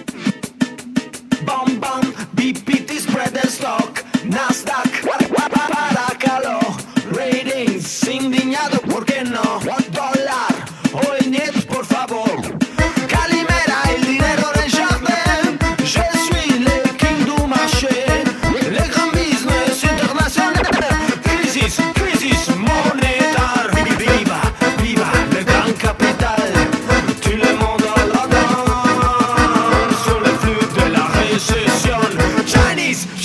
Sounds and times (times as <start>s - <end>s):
Music: 0.0s - 33.2s
Sound effect: 4.9s - 6.1s, 20.5s - 21.0s.